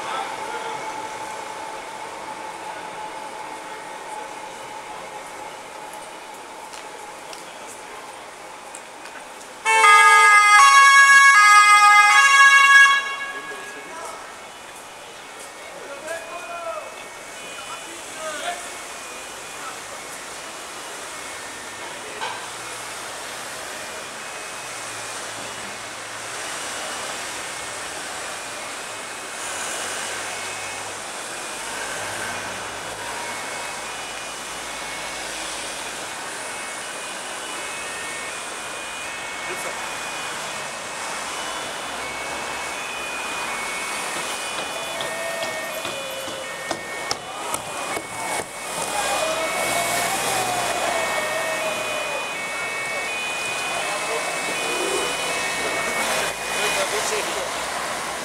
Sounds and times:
Rain: 0.0s - 9.7s, 17.0s - 42.6s.

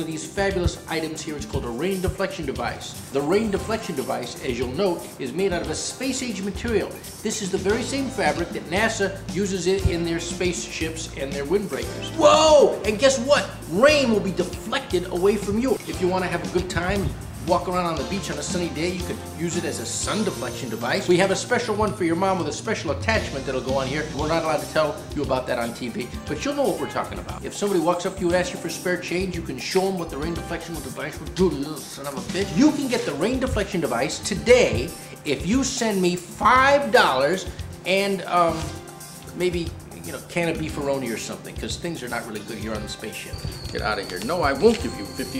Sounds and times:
Speech: 0.0s - 38.8s, 39.4s - 45.3s
Music: 0.0s - 45.3s.

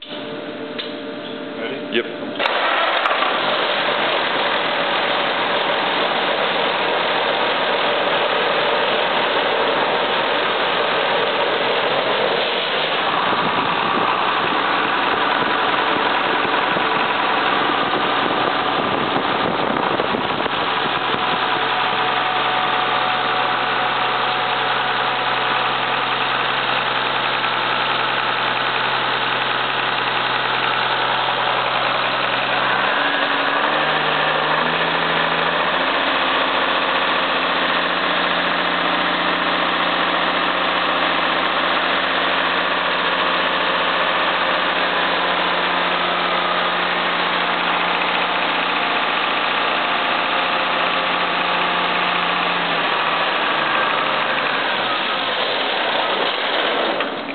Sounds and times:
Heavy engine (low frequency): 0.0s - 57.3s
Idling: 0.0s - 57.3s
Accelerating, revving, vroom: 32.6s - 36.5s.

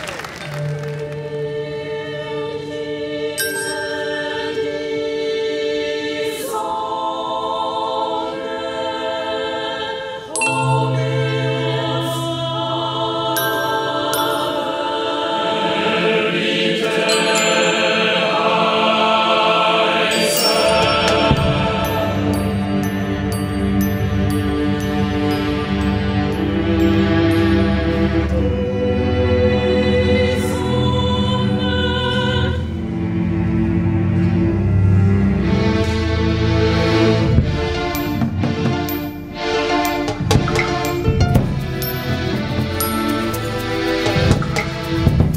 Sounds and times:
Choir: 0.0s - 45.3s.

